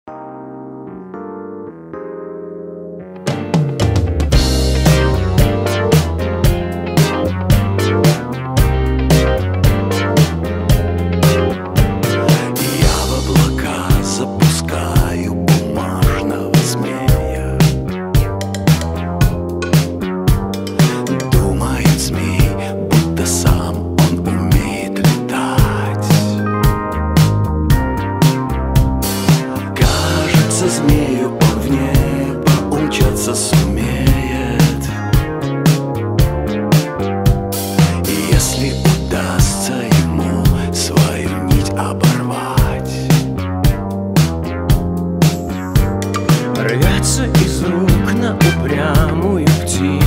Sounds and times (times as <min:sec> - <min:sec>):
Synthesizer: 0:00.1 - 0:50.0.